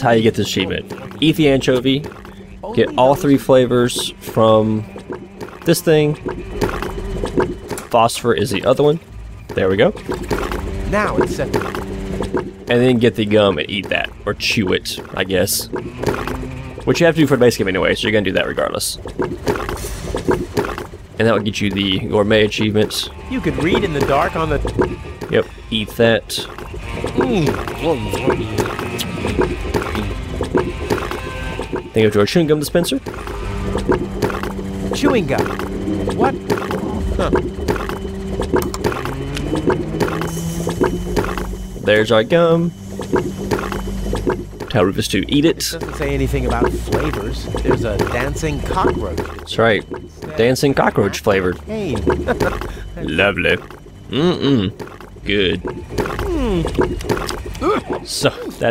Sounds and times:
Speech: 0.0s - 2.0s, 2.6s - 4.8s, 12.7s - 15.7s, 16.9s - 19.0s, 21.2s - 24.6s, 25.4s - 26.5s, 27.2s - 28.6s, 32.0s - 33.0s, 35.0s - 35.5s, 41.8s - 42.7s, 44.7s - 53.6s.

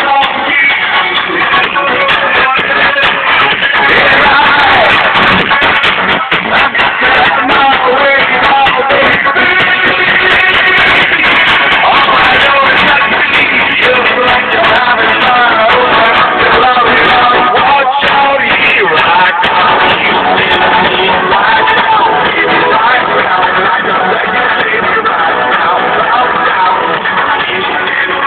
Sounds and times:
Music: 0.0s - 28.2s.

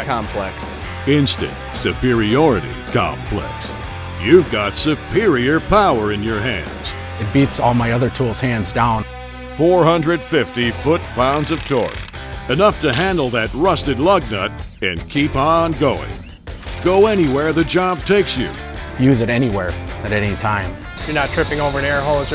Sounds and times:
Speech: 0.0s - 16.2s, 16.8s - 22.3s
Music: 0.0s - 22.3s
Tools: 12.9s - 13.2s.

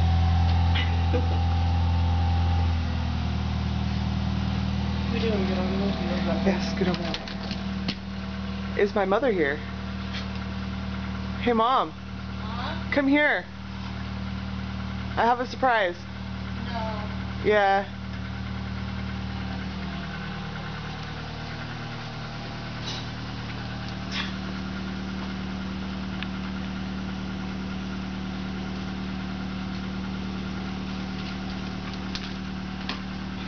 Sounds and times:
Outside, urban or manmade: 0.0s - 33.4s.

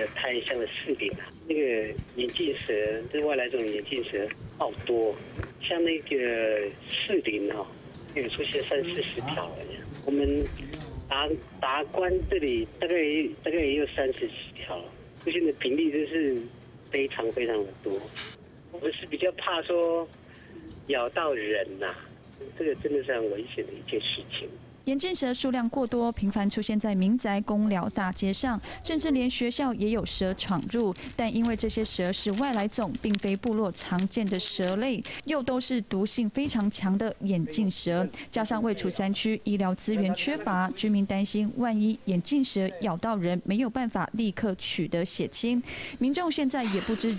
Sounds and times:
Speech: 0.0s - 18.1s, 18.7s - 20.1s, 20.9s - 47.1s.

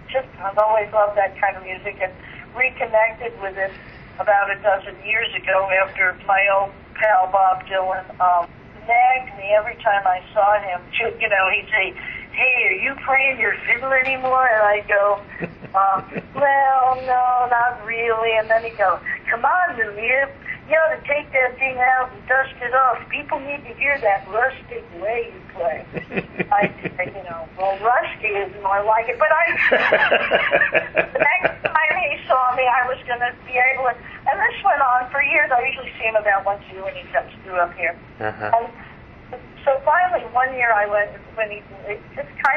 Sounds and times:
Speech: 0.1s - 30.0s, 31.0s - 38.8s, 39.4s - 42.5s.

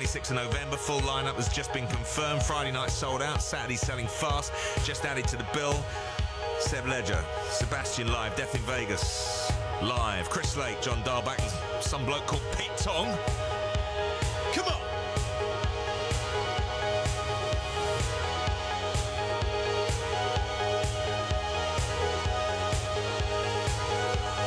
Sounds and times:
Speech: 0.0s - 5.9s, 6.6s - 13.3s, 14.5s - 14.9s
Music: 0.0s - 24.4s.

